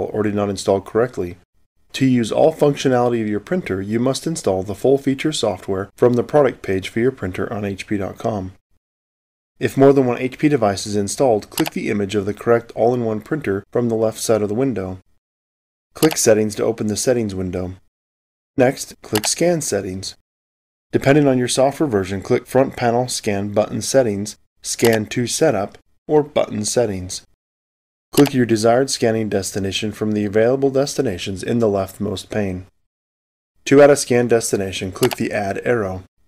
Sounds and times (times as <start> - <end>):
Speech: 0.0 - 8.6, 9.6 - 15.1, 16.0 - 17.9, 18.6 - 20.2, 20.9 - 27.4, 28.2 - 32.7, 33.6 - 36.1.